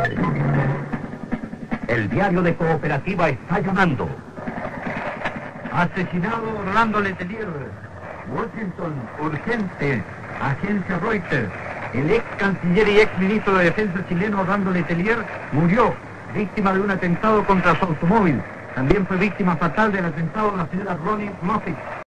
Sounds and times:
Radio: 0.0s - 0.9s, 1.8s - 22.0s
Speech: 1.9s - 4.2s, 5.7s - 21.8s.

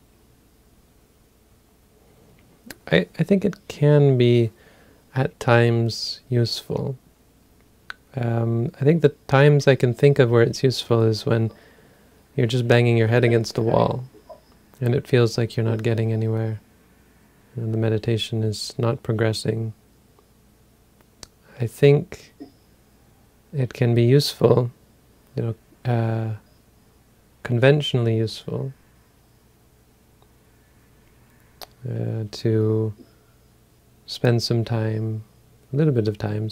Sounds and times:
Speech: 2.7s - 7.0s, 7.9s - 11.6s, 12.4s - 14.2s, 14.8s - 16.6s, 17.6s - 19.8s, 21.5s - 22.4s, 23.5s - 24.8s, 25.4s - 26.4s, 27.4s - 28.8s, 31.6s - 33.1s, 34.1s - 36.5s.

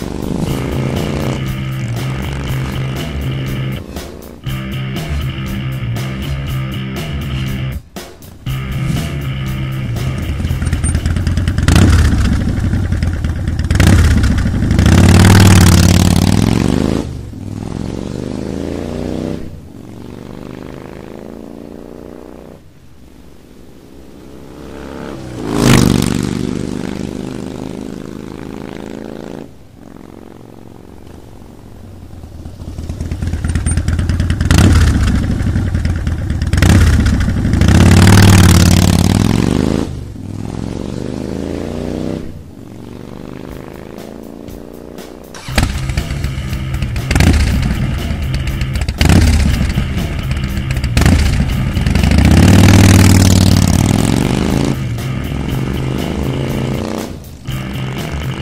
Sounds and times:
Music: 0.0s - 17.0s, 43.4s - 58.4s
Motorcycle: 0.0s - 58.4s.

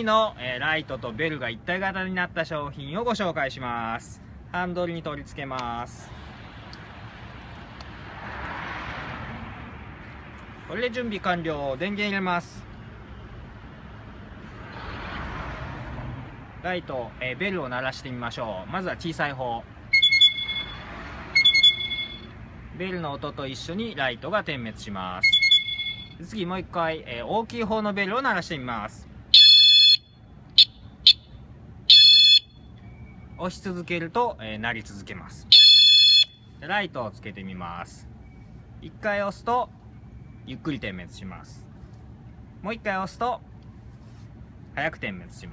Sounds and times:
Speech: 0.0s - 6.1s, 10.7s - 12.6s, 16.6s - 19.7s, 22.8s - 25.2s, 26.2s - 29.1s, 33.4s - 35.5s, 36.6s - 38.1s, 38.8s - 39.7s, 40.5s - 41.7s, 42.6s - 43.4s, 44.7s - 45.5s
Vehicle horn, car horn, honking: 21.4s - 22.3s, 25.2s - 26.1s, 29.4s - 31.3s, 31.9s - 32.6s, 35.5s - 36.4s.

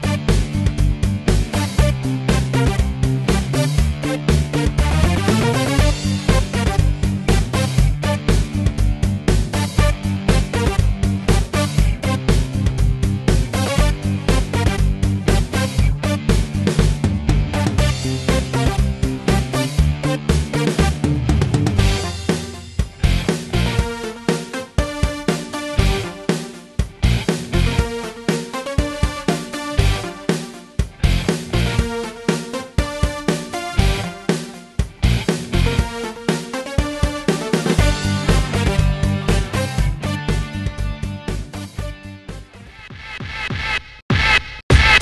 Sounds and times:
Music: 0.0s - 45.0s.

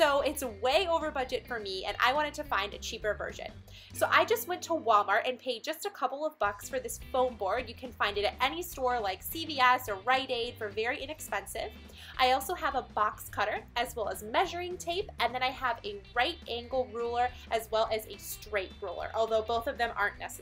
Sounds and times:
Music: 0.0s - 20.4s
Speech: 0.0s - 20.4s.

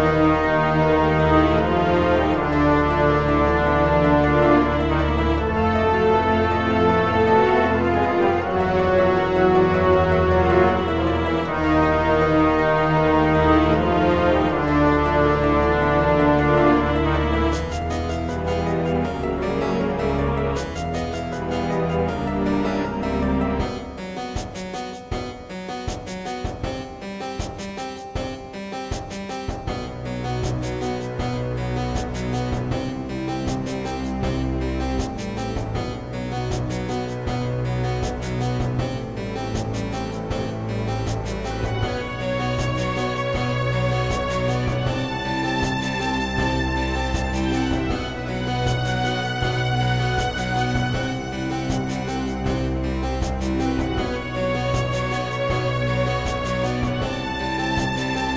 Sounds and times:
Video game music: 0.0s - 58.3s.

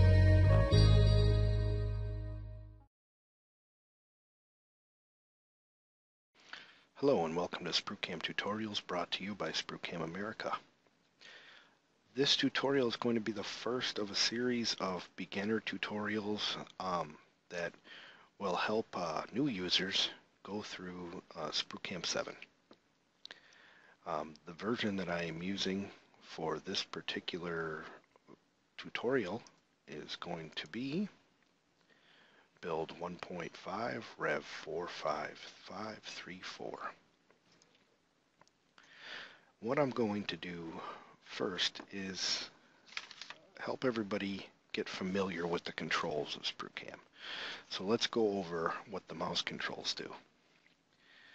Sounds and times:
Speech: 7.0s - 10.7s, 12.1s - 17.8s, 18.4s - 22.5s, 24.0s - 28.0s, 28.8s - 31.2s, 32.6s - 37.1s, 39.6s - 42.6s, 43.5s - 47.1s, 47.7s - 50.3s.

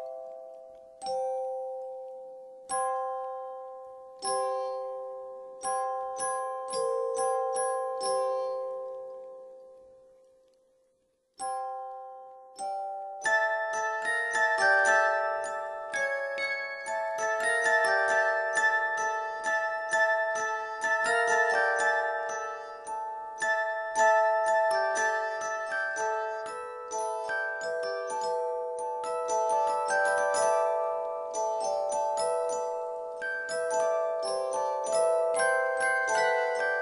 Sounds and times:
Music: 0.0s - 36.8s.

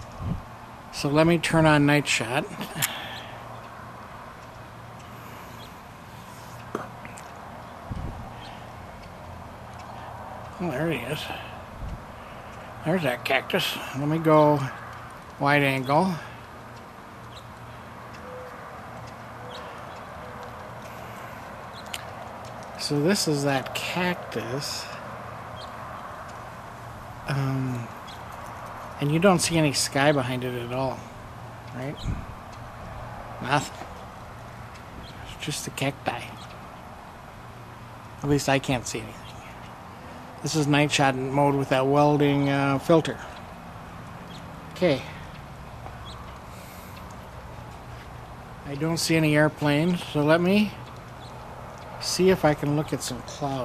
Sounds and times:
Speech: 1.0s - 3.0s, 10.6s - 11.5s, 12.8s - 14.8s, 15.4s - 16.3s, 22.8s - 25.0s, 27.3s - 28.0s, 29.0s - 31.0s, 31.7s - 32.1s, 33.4s - 33.8s, 35.2s - 36.4s, 38.2s - 39.3s, 40.4s - 43.3s, 44.8s - 45.2s, 48.6s - 50.8s, 52.0s - 53.6s.

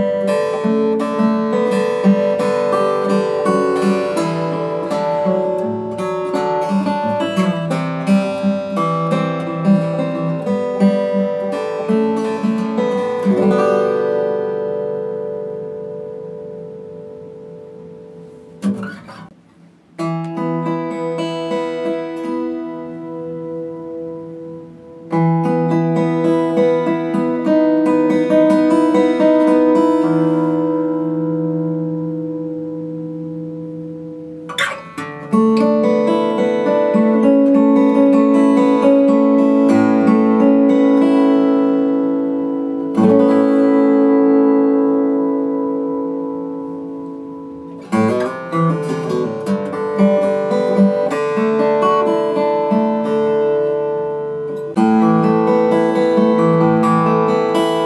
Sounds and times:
Music: 0.0s - 57.8s.

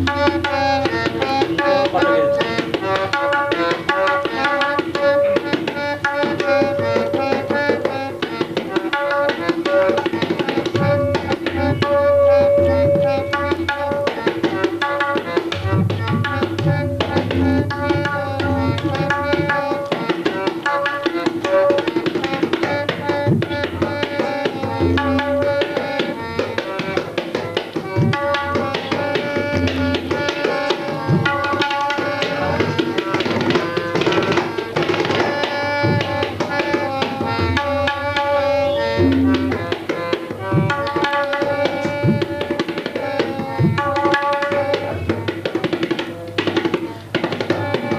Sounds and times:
Music: 0.0s - 47.9s.

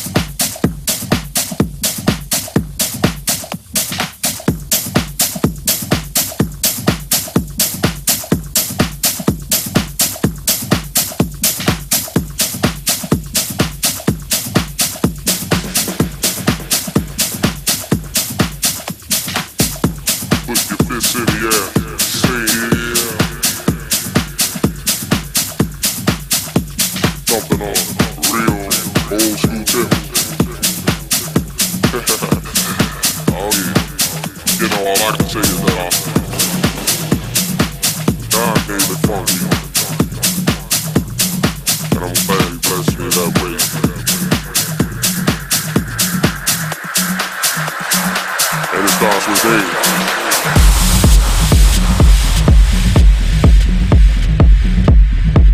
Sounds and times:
Music: 0.0s - 55.5s.

